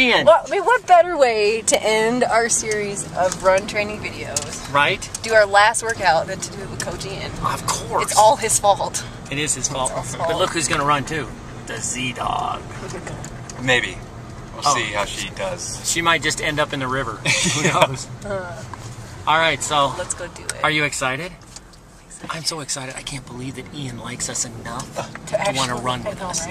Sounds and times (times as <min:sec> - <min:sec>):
Outside, urban or manmade: 0:00.0 - 0:26.5
Speech: 0:14.6 - 0:17.0.